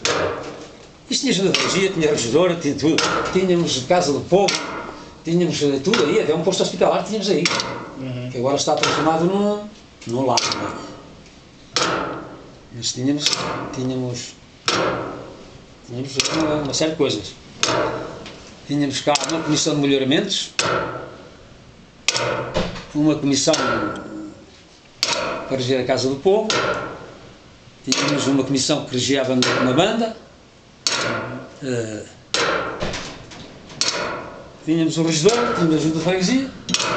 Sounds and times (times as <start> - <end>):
Speech: 1.1 - 4.6, 5.3 - 10.9, 12.7 - 14.4, 15.9 - 17.4, 18.7 - 20.6, 22.9 - 24.4, 25.5 - 26.6, 27.9 - 30.2, 31.3 - 32.2, 34.7 - 36.6.